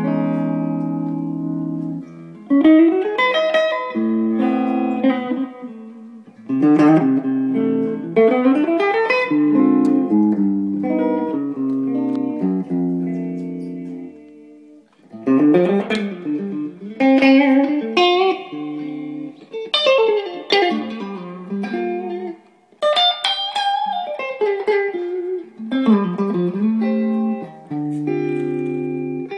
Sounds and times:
Music: 0:00.0 - 0:29.3.

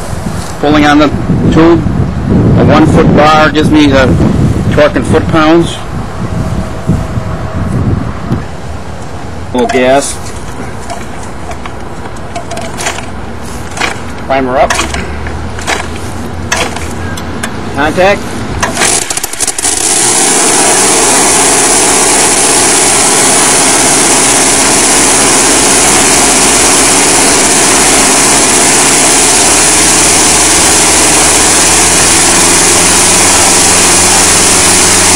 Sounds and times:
Speech: 0:00.6 - 0:01.8, 0:02.6 - 0:05.9, 0:09.6 - 0:10.2, 0:14.3 - 0:14.8, 0:17.8 - 0:18.2.

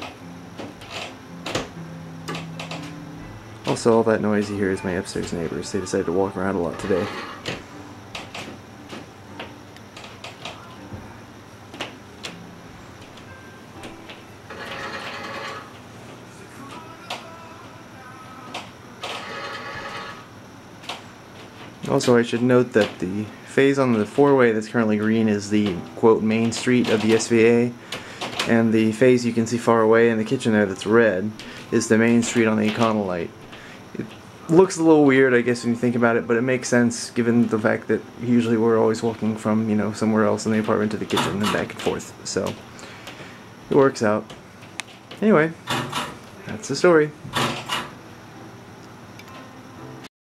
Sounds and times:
Music: 0:00.0 - 0:41.8, 0:45.2 - 0:50.1
Speech: 0:03.7 - 0:07.2, 0:21.8 - 0:27.8, 0:28.5 - 0:33.3, 0:34.0 - 0:42.6, 0:43.7 - 0:44.3, 0:45.2 - 0:45.6, 0:46.4 - 0:47.2.

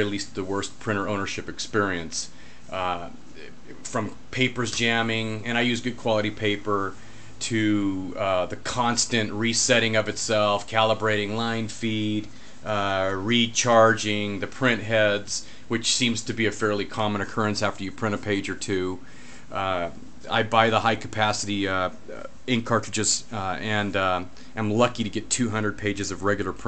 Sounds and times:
Speech: 0:00.0 - 0:26.6.

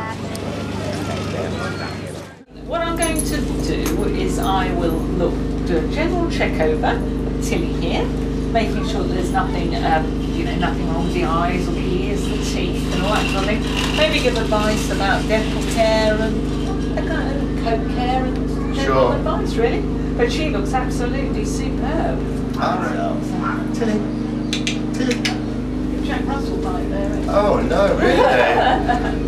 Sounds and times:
Speech: 0:00.0 - 0:24.1.

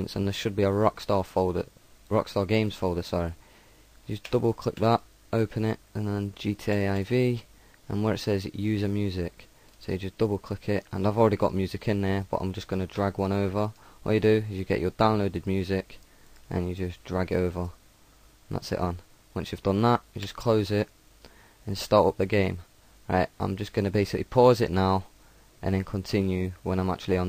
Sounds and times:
Speech: 0:00.0 - 0:03.4, 0:04.1 - 0:17.8, 0:18.5 - 0:20.9, 0:21.7 - 0:27.2.

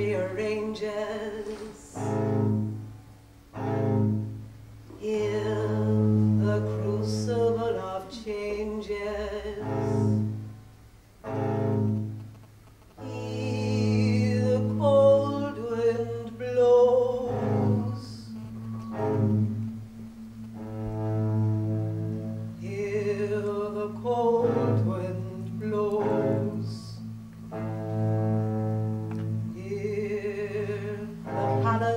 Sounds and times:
Double bass: 0:00.0 - 0:31.9.

